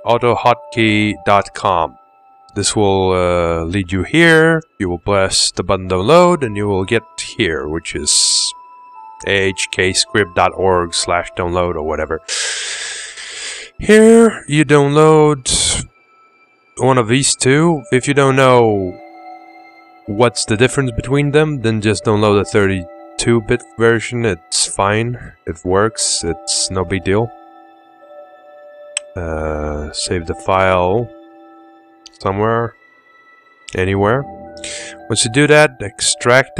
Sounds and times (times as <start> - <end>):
Speech: 0.0 - 2.0, 2.6 - 8.6, 9.2 - 12.3, 13.8 - 15.9, 16.8 - 19.0, 20.1 - 27.3, 29.0 - 31.1, 32.1 - 32.8, 33.7 - 34.3, 35.0 - 36.5
Music: 0.0 - 36.5.